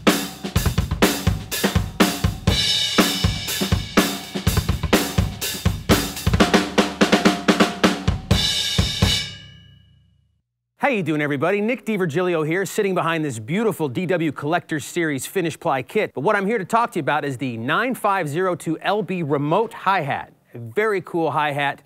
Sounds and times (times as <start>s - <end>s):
Bass drum: 0.0s - 9.5s
Drum kit: 0.0s - 9.8s
Drum roll: 0.0s - 9.8s.